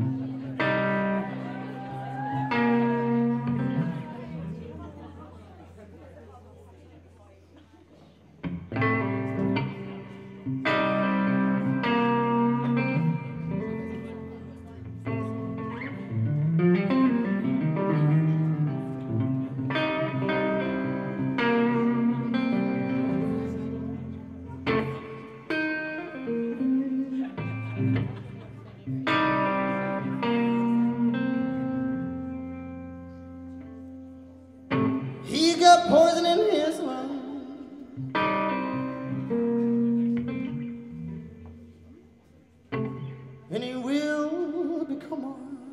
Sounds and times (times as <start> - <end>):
Music: 0.0 - 5.3, 8.4 - 45.7.